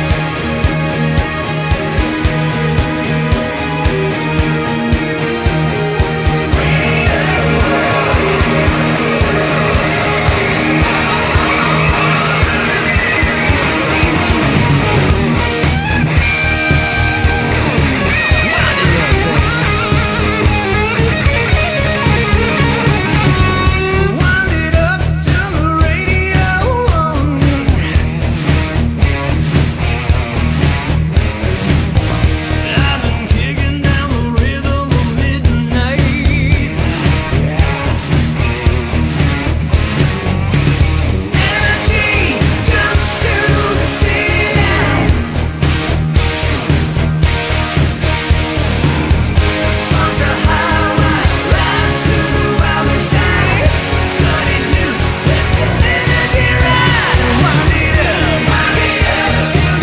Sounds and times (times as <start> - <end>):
Music: 0.0 - 59.8.